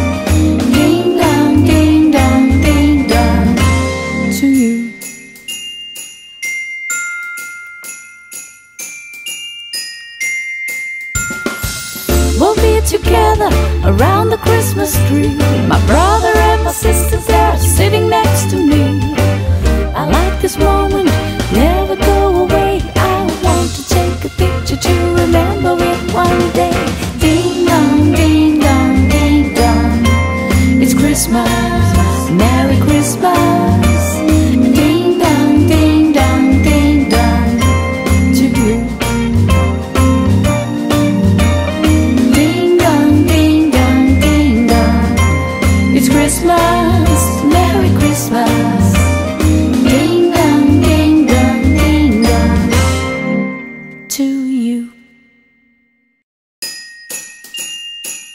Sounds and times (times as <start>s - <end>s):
Ding: 4.7s - 12.2s, 53.6s - 58.3s.